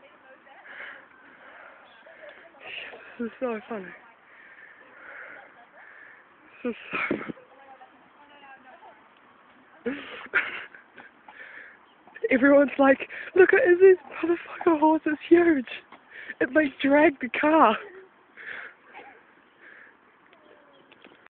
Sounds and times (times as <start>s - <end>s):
Speech: 16.4s - 18.0s.